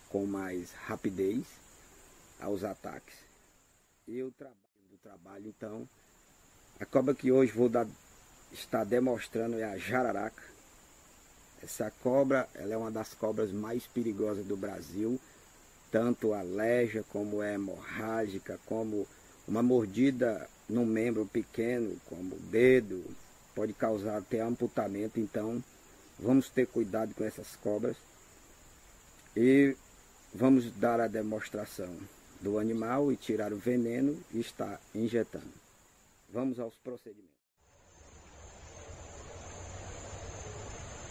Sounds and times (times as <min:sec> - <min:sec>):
Outside, rural or natural: 0:00.0 - 0:41.1
Speech: 0:00.1 - 0:01.6, 0:02.4 - 0:03.3, 0:04.1 - 0:05.9, 0:06.8 - 0:08.0, 0:08.6 - 0:10.5, 0:11.6 - 0:15.2, 0:15.9 - 0:28.0, 0:29.3 - 0:29.8, 0:30.4 - 0:35.6, 0:36.3 - 0:37.4.